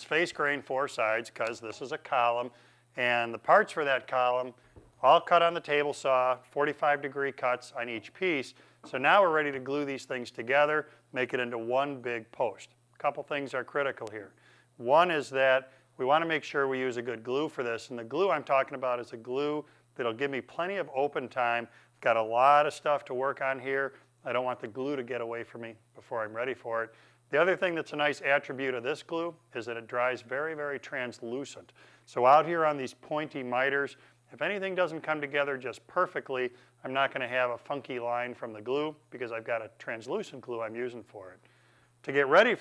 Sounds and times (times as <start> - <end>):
Speech: 0.0 - 41.4, 42.0 - 42.6.